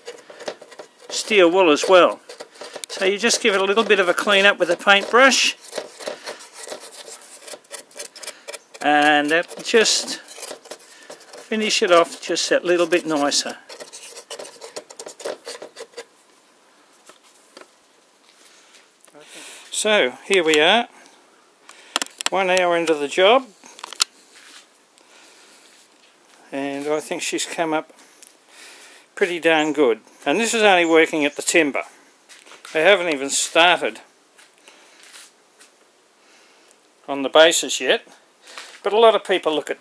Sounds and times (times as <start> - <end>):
Speech: 1.1 - 2.2, 2.9 - 5.6, 8.8 - 10.2, 11.5 - 13.6, 19.1 - 20.9, 22.3 - 23.5, 26.5 - 27.9, 29.2 - 31.9, 32.7 - 34.1, 37.1 - 38.2, 38.8 - 39.8.